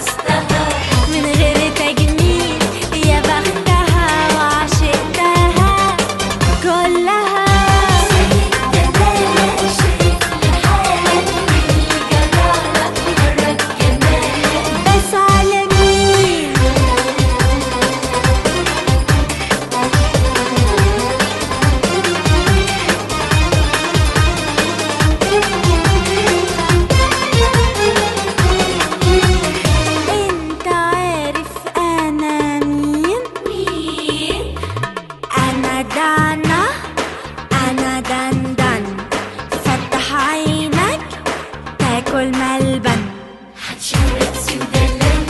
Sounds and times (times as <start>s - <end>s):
Folk music: 0.0s - 31.1s.